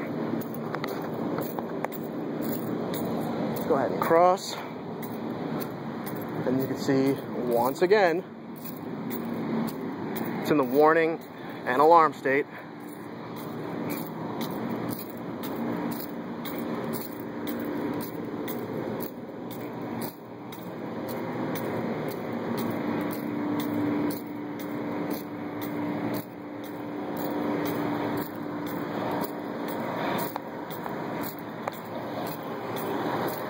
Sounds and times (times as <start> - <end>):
Vehicle: 0.0 - 33.4.